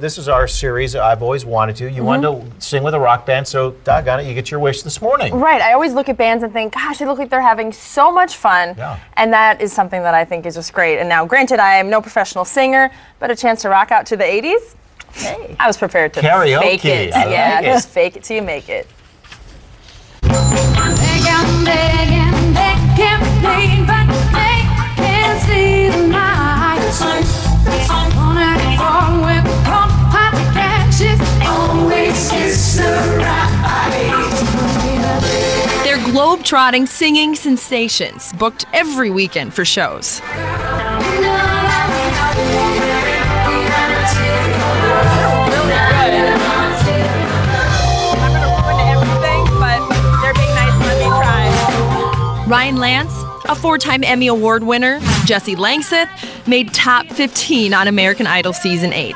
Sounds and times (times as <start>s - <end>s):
Speech: 0.3s - 5.7s, 8.8s - 9.0s, 15.2s - 18.8s.